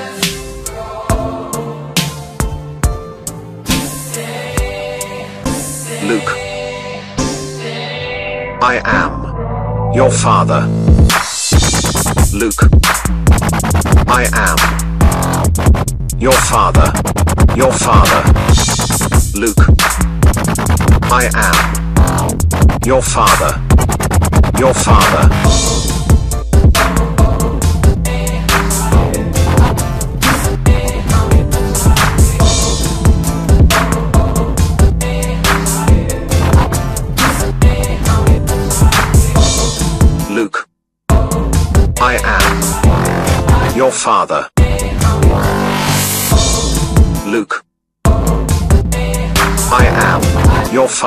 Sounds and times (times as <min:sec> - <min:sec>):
Electronica: 0:06.0 - 0:40.3, 0:41.1 - 0:43.8, 0:44.6 - 0:47.2, 0:48.1 - 0:51.0
Dubstep: 0:10.0 - 0:40.2, 0:41.4 - 0:43.9, 0:44.6 - 0:47.3, 0:48.2 - 0:51.0.